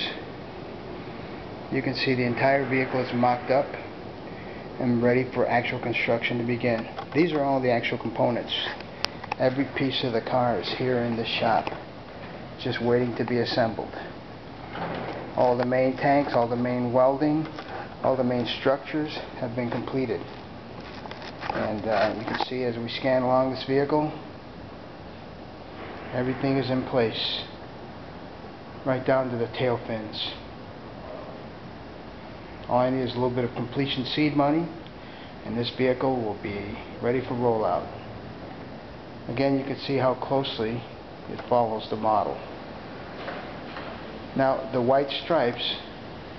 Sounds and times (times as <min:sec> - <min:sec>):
Speech: 0:00.0 - 0:00.3, 0:01.7 - 0:03.9, 0:04.8 - 0:08.8, 0:09.4 - 0:11.8, 0:12.6 - 0:14.2, 0:15.4 - 0:20.4, 0:21.5 - 0:24.3, 0:26.1 - 0:27.6, 0:28.8 - 0:30.5, 0:32.7 - 0:34.8, 0:35.4 - 0:38.0, 0:39.3 - 0:42.5, 0:44.4 - 0:45.9.